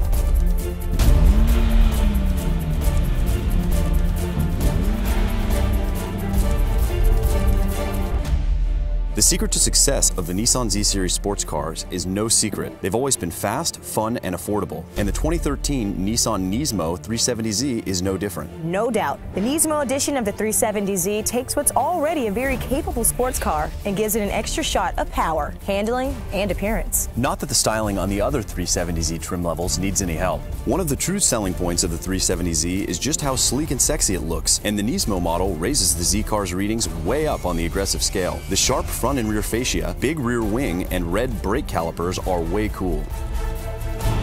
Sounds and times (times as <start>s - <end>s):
Music: 0.0s - 44.2s
Speech: 9.2s - 43.1s.